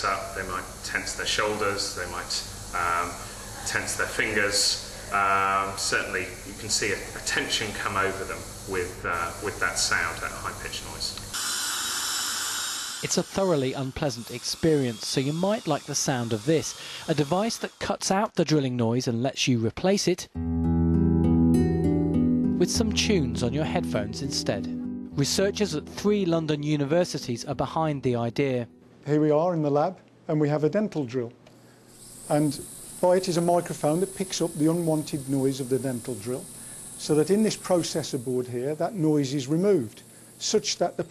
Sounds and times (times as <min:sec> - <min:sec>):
Speech: 0:00.0 - 0:11.2, 0:13.0 - 0:20.3, 0:22.6 - 0:31.4, 0:32.3 - 0:36.4, 0:37.0 - 0:41.1.